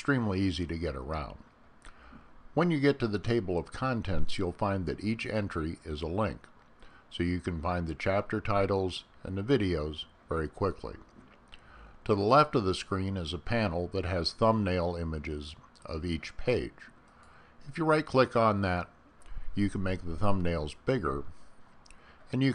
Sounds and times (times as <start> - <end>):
Speech: 0.0 - 1.4, 2.6 - 6.5, 7.1 - 11.1, 12.0 - 17.0, 17.6 - 18.9, 19.6 - 21.4, 22.3 - 22.5.